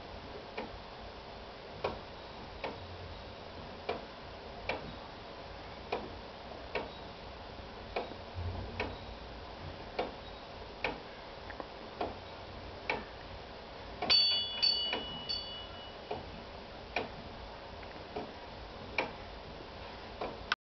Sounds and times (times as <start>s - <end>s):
Tick-tock: 2.6s - 2.8s, 3.9s - 4.9s, 5.9s - 6.9s, 10.0s - 10.2s, 12.9s - 13.1s, 18.2s - 19.2s, 19.8s - 20.5s.